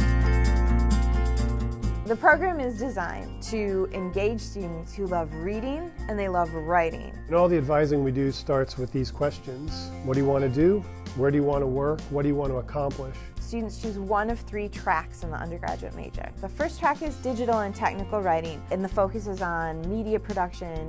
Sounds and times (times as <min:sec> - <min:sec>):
Music: 0:00.0 - 0:20.8
Speech: 0:02.1 - 0:06.5, 0:07.3 - 0:20.8.